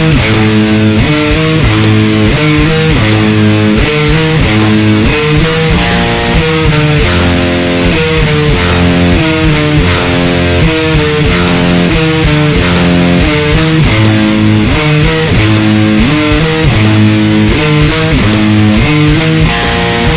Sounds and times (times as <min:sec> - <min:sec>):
Electric guitar: 0:00.0 - 0:20.1
Strum: 0:00.0 - 0:20.1.